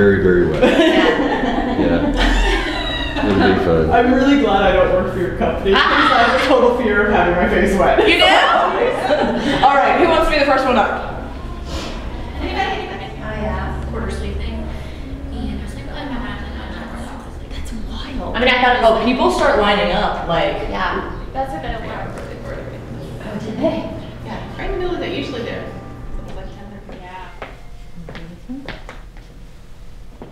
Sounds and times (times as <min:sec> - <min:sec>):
Speech: 0:01.8 - 0:02.1, 0:03.2 - 0:08.8.